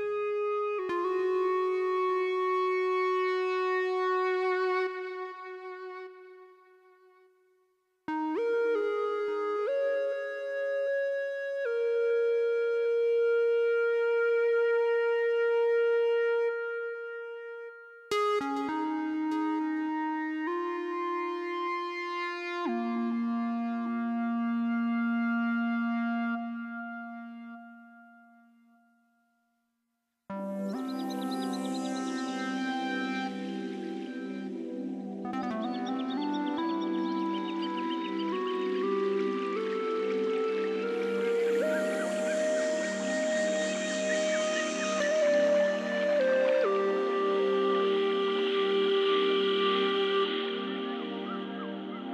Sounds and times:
Music: 0.0 - 29.6, 30.3 - 52.1.

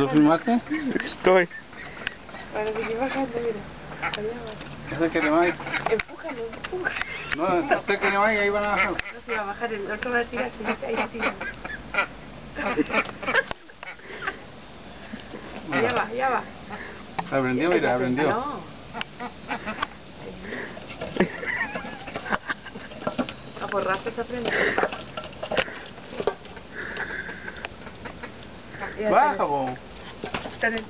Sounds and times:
Quack: 5.2 - 9.6, 10.4 - 14.0, 19.2 - 19.9.

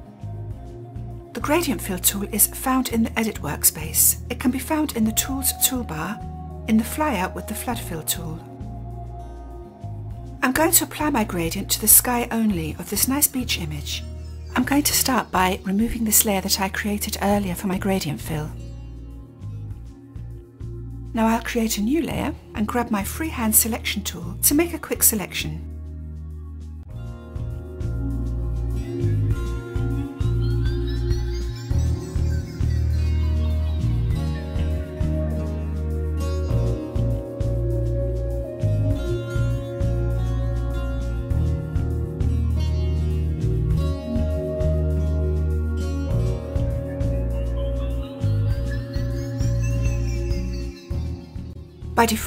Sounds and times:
Music: 0.0 - 52.2
Speech: 1.4 - 8.5, 10.4 - 14.0, 14.6 - 18.6, 21.2 - 25.7, 52.0 - 52.2.

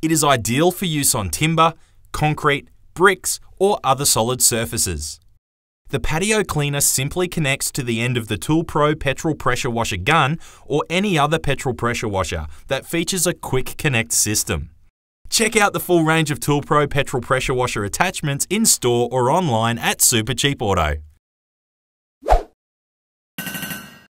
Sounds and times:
Speech: 0.0 - 5.3, 5.9 - 21.1.

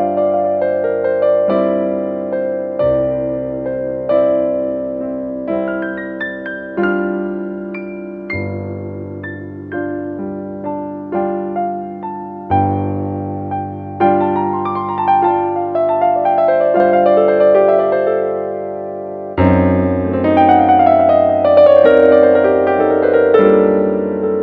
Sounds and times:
New-age music: 0.0 - 24.4.

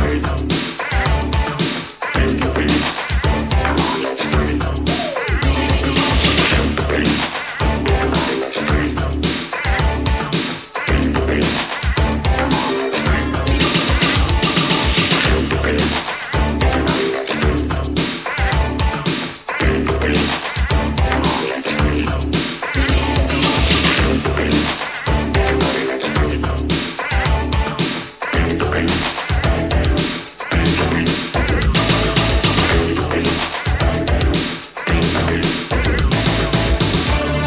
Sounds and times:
Music: 0.0 - 37.4.

